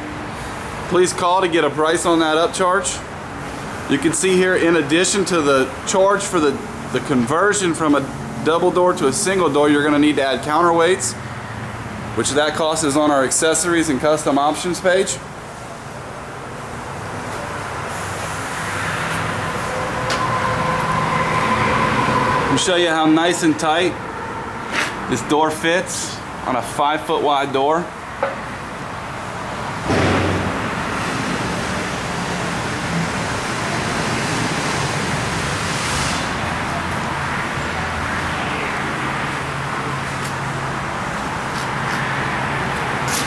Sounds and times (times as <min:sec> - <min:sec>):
Speech: 0:00.9 - 0:03.1, 0:03.9 - 0:11.2, 0:12.2 - 0:15.2, 0:22.5 - 0:24.0, 0:25.1 - 0:27.9.